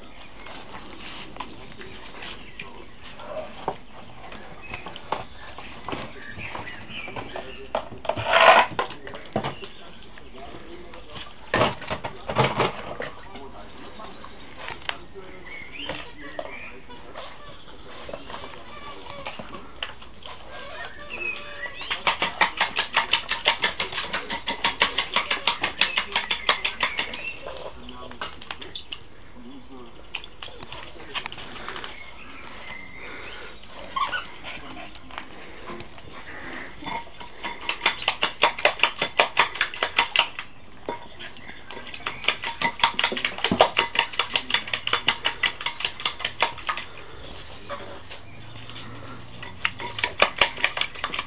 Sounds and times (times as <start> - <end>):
Dishes, pots, and pans: 36.8 - 40.2, 40.9 - 46.8, 49.4 - 51.2.